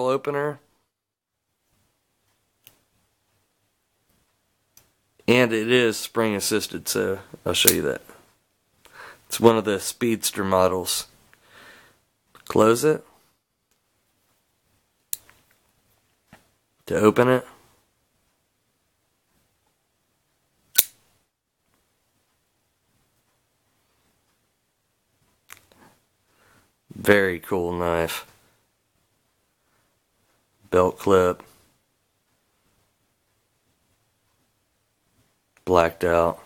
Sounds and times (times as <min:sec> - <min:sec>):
Speech: 0:00.0 - 0:00.7, 0:05.2 - 0:08.2, 0:09.3 - 0:11.1, 0:12.4 - 0:13.1, 0:16.8 - 0:17.6, 0:26.9 - 0:28.3, 0:30.7 - 0:31.6, 0:35.6 - 0:36.4
Inside, small room: 0:00.0 - 0:36.4.